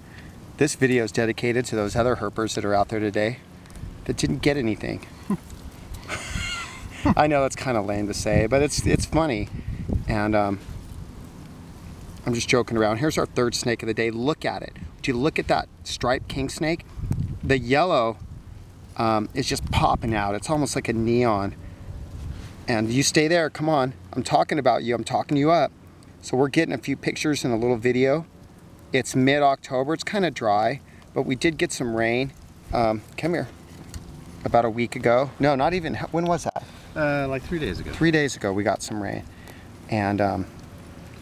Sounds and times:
Speech: 0.6 - 3.4, 4.1 - 5.1, 7.2 - 9.5, 10.1 - 10.6, 12.2 - 16.8, 17.5 - 18.2, 19.0 - 21.6, 22.7 - 28.3, 29.0 - 33.6, 34.4 - 39.3, 39.9 - 40.5.

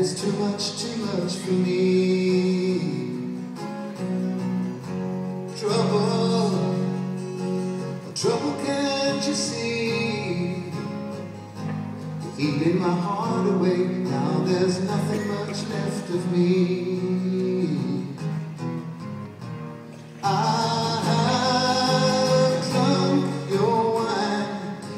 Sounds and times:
Music: 0.0 - 24.9.

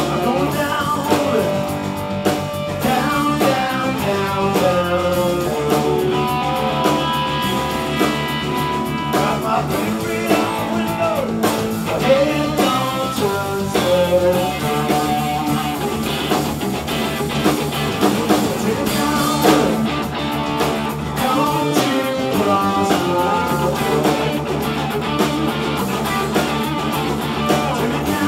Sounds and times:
Electric guitar: 0.0 - 28.2.

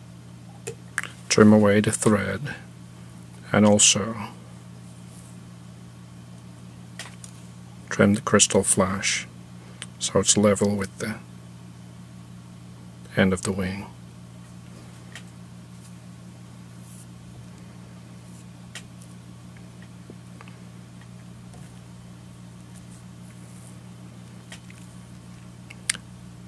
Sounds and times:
Speech: 1.3 - 2.7, 3.4 - 4.4, 7.9 - 9.3, 10.0 - 11.3, 13.1 - 14.0.

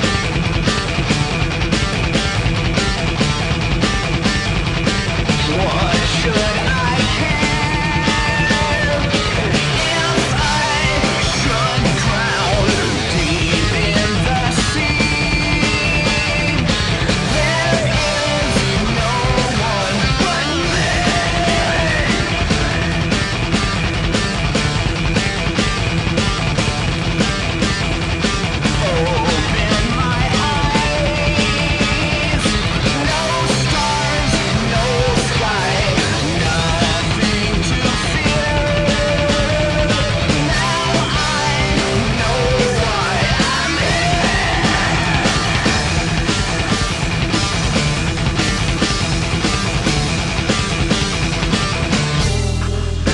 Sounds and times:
Grunge: 0.0 - 53.1
Punk rock: 0.0 - 53.1.

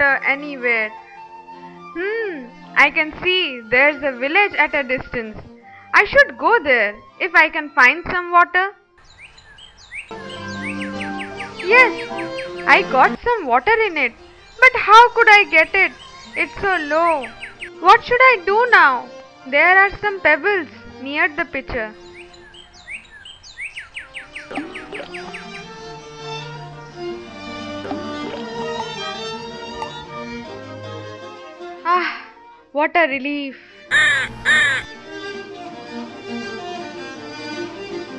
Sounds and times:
Speech: 0.0 - 1.0, 12.7 - 17.2, 17.8 - 21.9, 31.9 - 33.6
Music: 0.0 - 9.2, 10.0 - 38.1
Bird vocalization, bird call, bird song: 9.0 - 12.9, 13.7 - 17.8, 21.9 - 26.4.

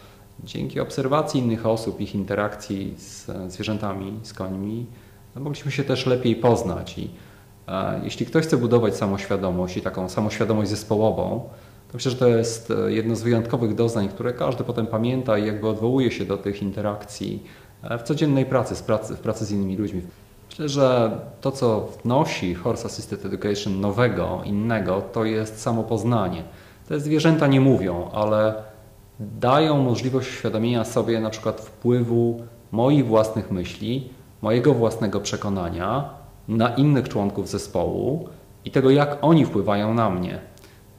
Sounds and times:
Speech: 0.4 - 40.6.

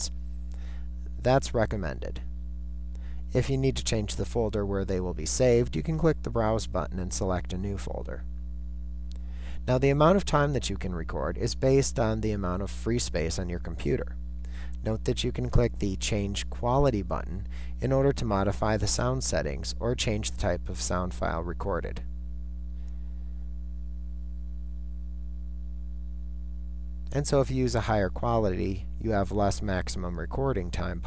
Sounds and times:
Speech: 1.1 - 2.3, 3.3 - 8.3, 9.6 - 14.2, 14.8 - 22.1, 27.1 - 31.0.

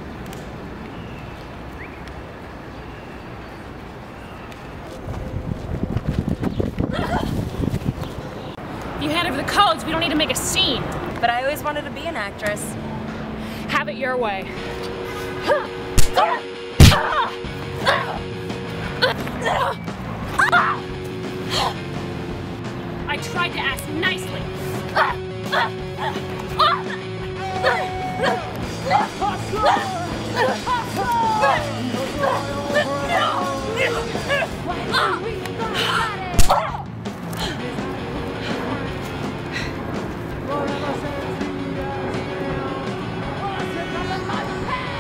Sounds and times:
Run: 3.8 - 8.2.

